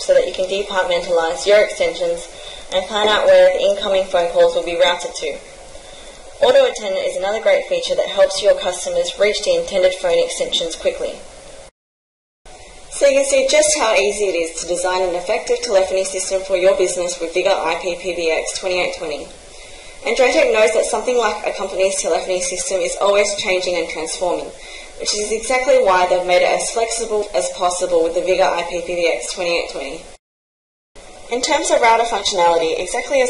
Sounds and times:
Speech: 0:00.0 - 0:05.5, 0:06.4 - 0:11.2, 0:13.0 - 0:19.3, 0:20.0 - 0:30.1, 0:31.3 - 0:33.2.

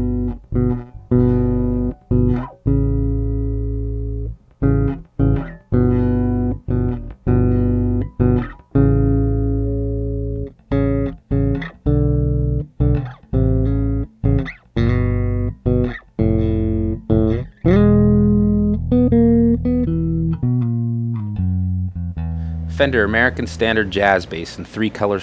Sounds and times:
Electric guitar: 0:00.0 - 0:22.8
Effects unit: 0:00.0 - 0:24.1
Bass guitar: 0:00.0 - 0:24.3
Distortion: 0:00.0 - 0:25.2.

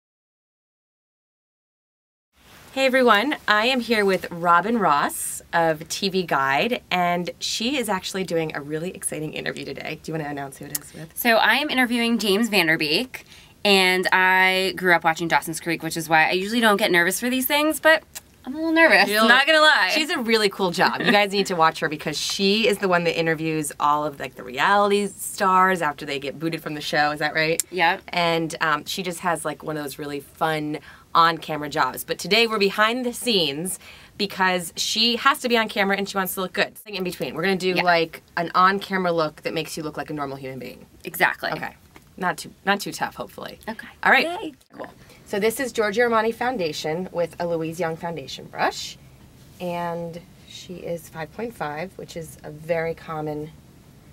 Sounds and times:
Speech: 0:02.8 - 0:49.0, 0:49.6 - 0:53.5.

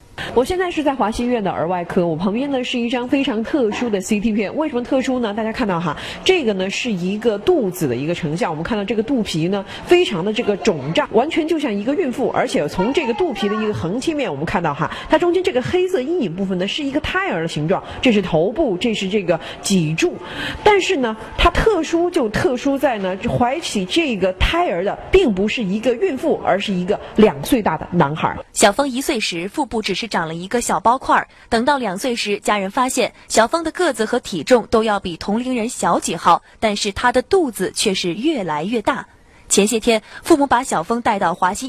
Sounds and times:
Speech: 0:00.2 - 0:41.6.

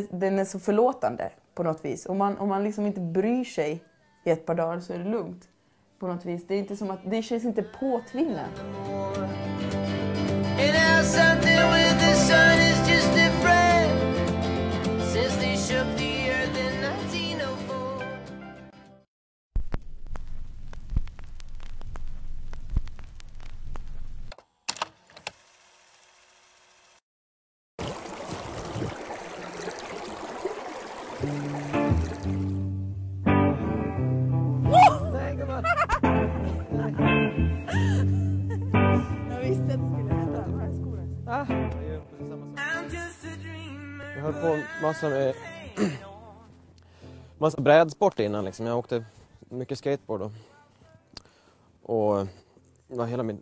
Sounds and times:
Music: 0:06.6 - 0:19.1, 0:31.2 - 0:47.3
Trickle, dribble: 0:27.8 - 0:32.5.

